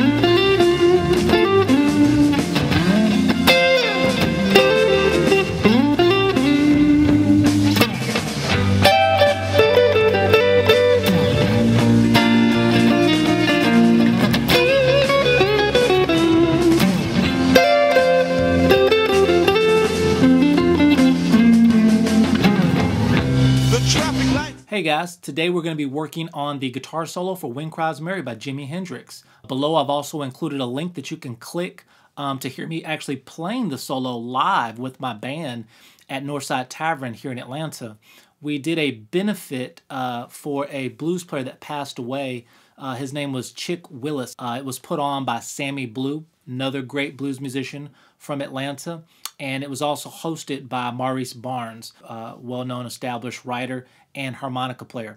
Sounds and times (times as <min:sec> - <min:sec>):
Electric guitar: 0:00.0 - 0:24.6
Strum: 0:00.0 - 0:24.6.